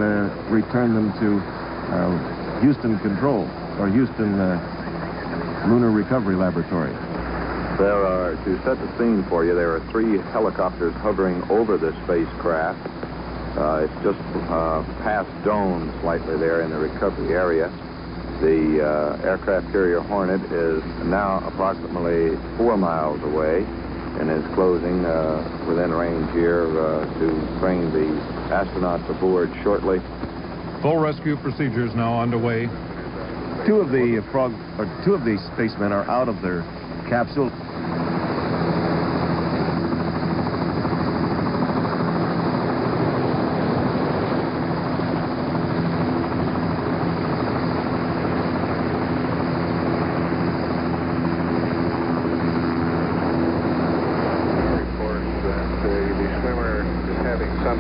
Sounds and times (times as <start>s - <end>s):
Speech: 0.0s - 7.0s, 7.8s - 12.8s, 13.6s - 17.8s, 18.4s - 30.1s, 30.8s - 32.8s, 33.6s - 37.6s, 54.3s - 57.8s.